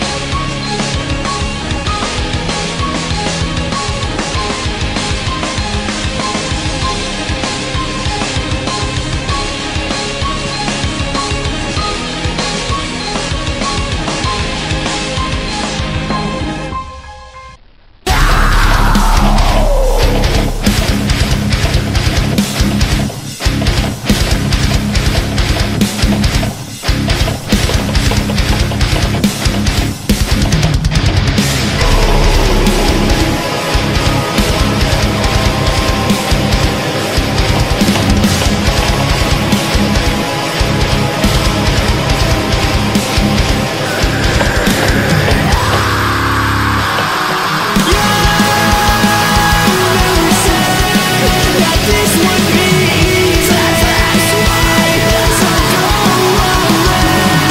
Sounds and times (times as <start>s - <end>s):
Guitar: 0.0s - 57.5s.